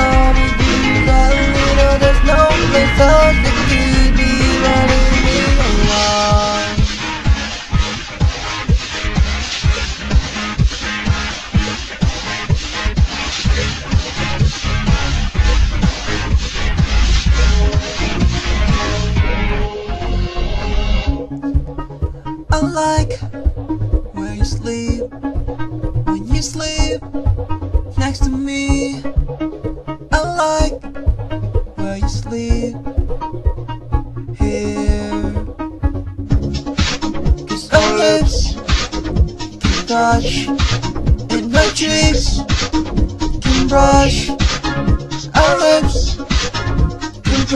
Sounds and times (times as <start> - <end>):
Pop music: 0.0 - 20.4, 21.1 - 23.4, 24.1 - 25.1, 26.1 - 27.1, 28.0 - 29.2, 30.0 - 30.9, 31.8 - 32.8, 34.3 - 47.5.